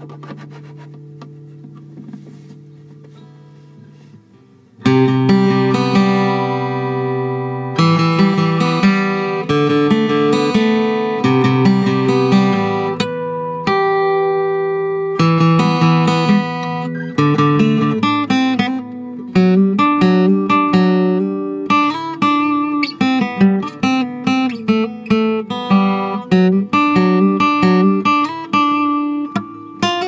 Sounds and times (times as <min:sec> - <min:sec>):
Acoustic guitar: 0:00.0 - 0:30.0.